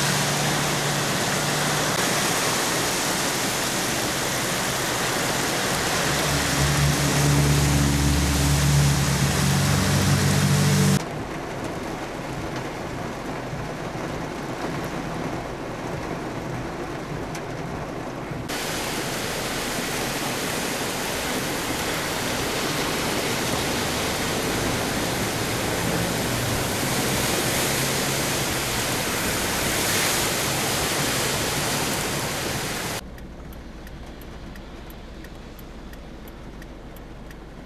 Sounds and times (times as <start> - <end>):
Car: 0.0 - 37.6
Outside, urban or manmade: 0.0 - 37.6
Rain: 0.0 - 37.6.